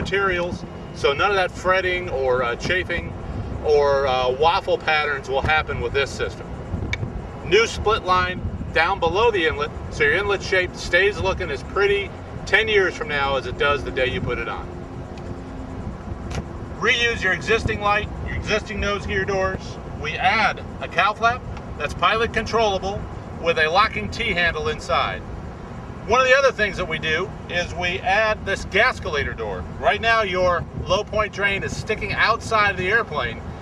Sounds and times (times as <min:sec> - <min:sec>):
Speech: 0:00.0 - 0:06.5, 0:07.5 - 0:14.7, 0:16.8 - 0:25.2, 0:26.1 - 0:33.4.